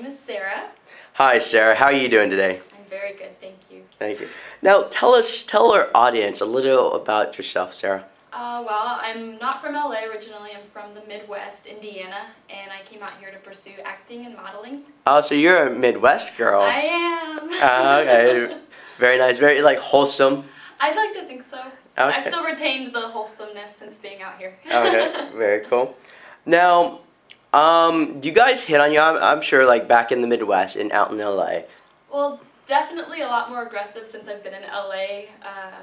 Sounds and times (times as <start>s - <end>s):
Speech: 0.0s - 3.3s, 4.0s - 25.9s, 26.5s - 27.0s, 27.6s - 31.6s.